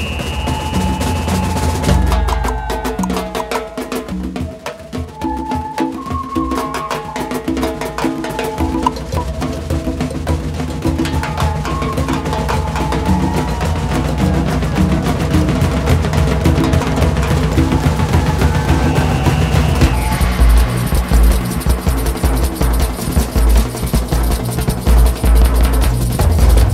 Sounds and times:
Percussion: 0:00.0 - 0:26.7.

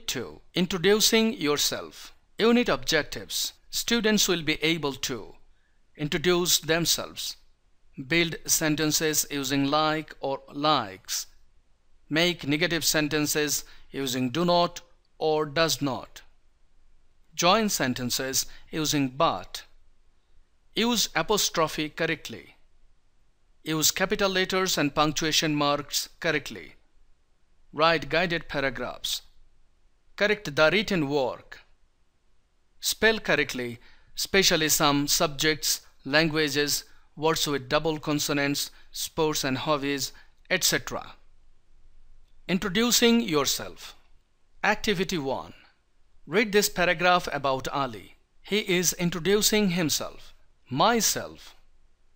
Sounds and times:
Speech: 0:00.0 - 0:05.4, 0:06.0 - 0:07.4, 0:08.0 - 0:11.4, 0:12.1 - 0:16.3, 0:17.4 - 0:19.8, 0:20.8 - 0:22.6, 0:23.6 - 0:26.8, 0:27.8 - 0:29.3, 0:30.2 - 0:31.7, 0:32.8 - 0:41.2, 0:42.5 - 0:44.0, 0:44.6 - 0:45.7, 0:46.3 - 0:51.6.

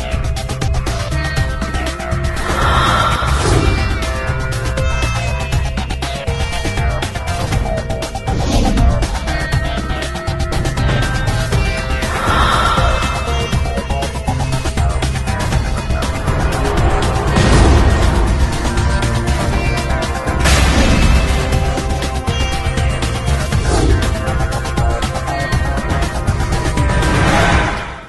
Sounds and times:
Music: 0:00.0 - 0:28.0
Sound effect: 0:08.2 - 0:10.0, 0:26.8 - 0:28.0.

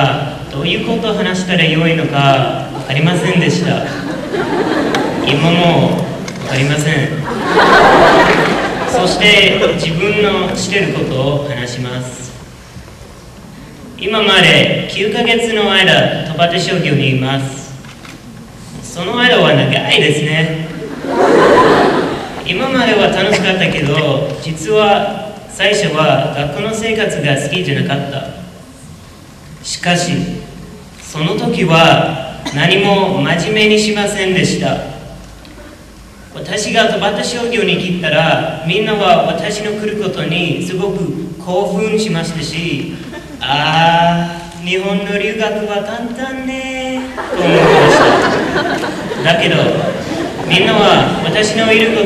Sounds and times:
Male speech, man speaking: 0:00.0 - 0:03.9, 0:05.2 - 0:07.2, 0:08.9 - 0:12.4, 0:14.0 - 0:17.8, 0:18.8 - 0:20.7, 0:22.5 - 0:28.4, 0:29.6 - 0:30.5, 0:31.1 - 0:35.0, 0:36.4 - 0:47.8, 0:49.2 - 0:49.9, 0:50.5 - 0:52.0
Narration, monologue: 0:00.0 - 0:07.9, 0:08.5 - 0:12.8, 0:13.9 - 0:21.0, 0:22.4 - 0:52.0.

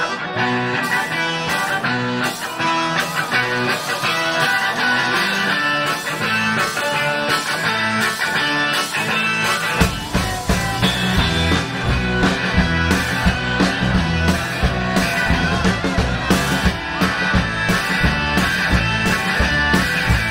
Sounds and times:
Music: 0:00.0 - 0:20.3.

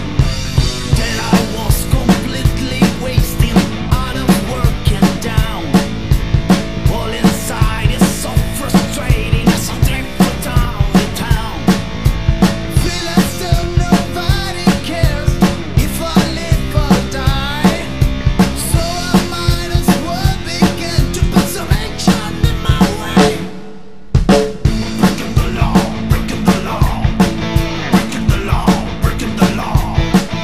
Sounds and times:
Music: 0:00.0 - 0:30.4.

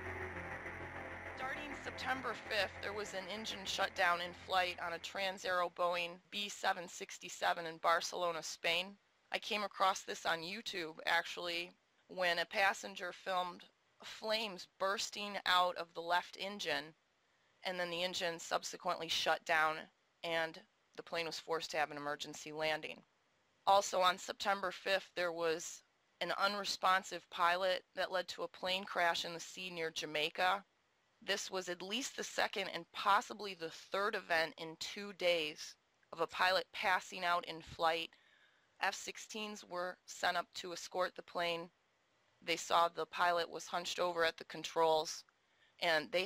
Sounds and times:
Speech: 0:01.4 - 0:16.9, 0:17.7 - 0:23.0, 0:23.7 - 0:30.6, 0:31.3 - 0:38.1, 0:38.8 - 0:41.7, 0:42.5 - 0:45.2, 0:45.8 - 0:46.2.

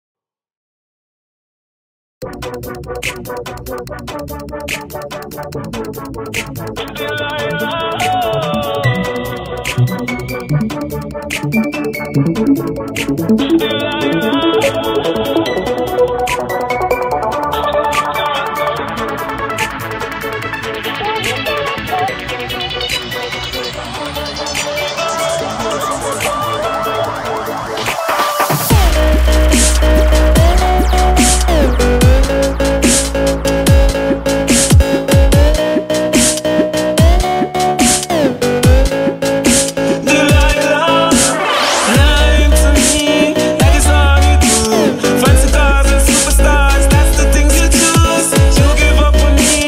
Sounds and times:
Electronic music: 0:02.2 - 0:49.6.

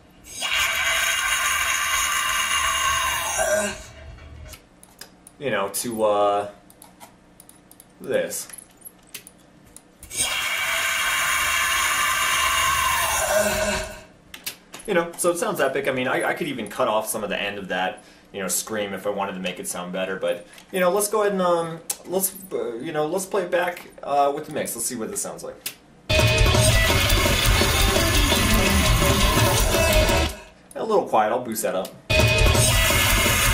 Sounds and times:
Speech: 0:05.4 - 0:06.6, 0:08.0 - 0:08.5, 0:14.9 - 0:25.7, 0:30.8 - 0:32.0.

